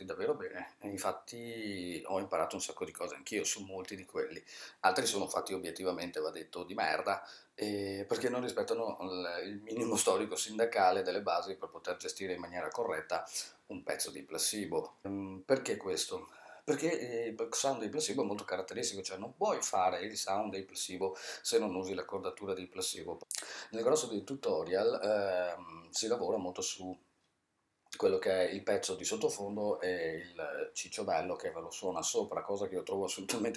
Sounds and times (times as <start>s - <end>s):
Speech: 0.0s - 27.0s, 27.9s - 33.5s.